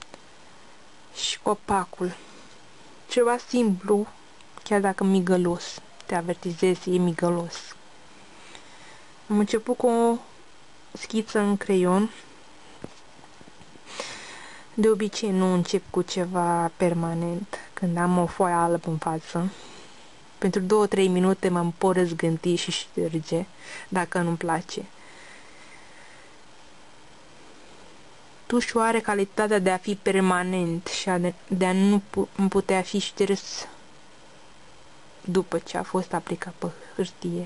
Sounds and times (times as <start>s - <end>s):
Speech: 1.2s - 2.2s, 3.1s - 7.8s, 9.3s - 10.3s, 11.0s - 12.2s, 14.8s - 19.6s, 20.4s - 24.9s, 28.5s - 33.8s, 35.2s - 37.4s.